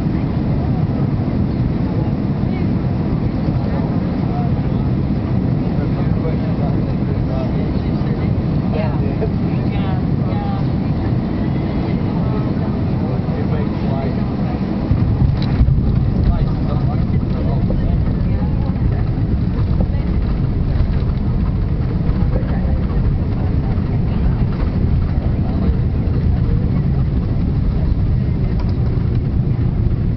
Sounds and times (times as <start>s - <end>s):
Fixed-wing aircraft, airplane: 0.0s - 30.1s
Speech: 5.6s - 15.0s, 15.9s - 20.2s, 22.2s - 27.1s
Flap: 14.8s - 30.1s.